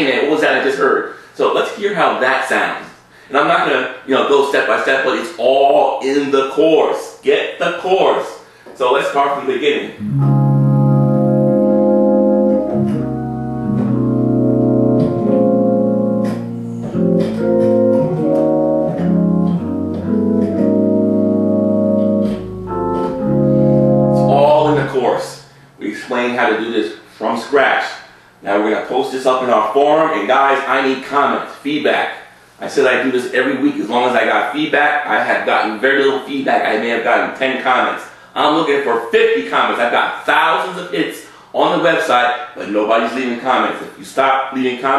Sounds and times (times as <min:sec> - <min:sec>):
Electric piano: 0:10.0 - 0:25.7.